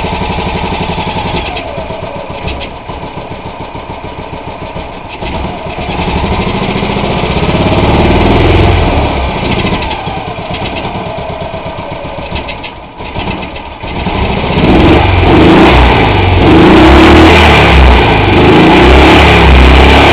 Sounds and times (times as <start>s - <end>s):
Idling: 0.0s - 16.5s
Heavy engine (low frequency): 0.0s - 20.1s
Vehicle: 0.0s - 20.1s
Accelerating, revving, vroom: 5.2s - 10.0s, 13.8s - 20.1s.